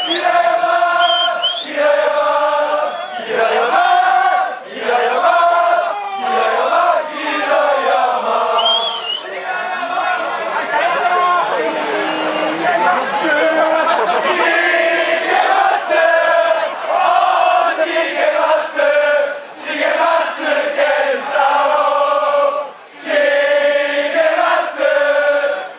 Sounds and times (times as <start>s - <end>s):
Chant: 0.0s - 10.4s, 11.0s - 25.7s
Crowd: 0.0s - 25.7s.